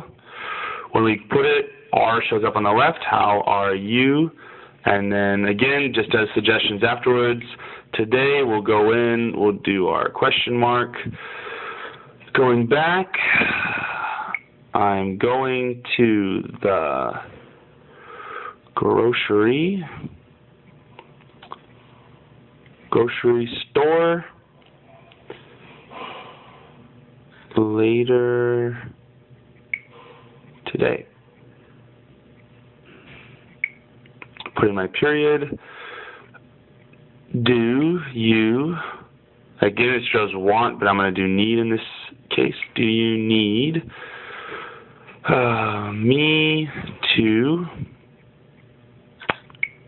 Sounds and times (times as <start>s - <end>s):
Speech: 0.9s - 11.2s, 12.3s - 13.4s, 14.7s - 17.3s, 18.8s - 20.1s, 22.9s - 24.4s, 27.5s - 29.0s, 30.6s - 31.1s, 34.4s - 35.6s, 37.3s - 39.0s, 39.6s - 43.9s, 45.2s - 47.9s.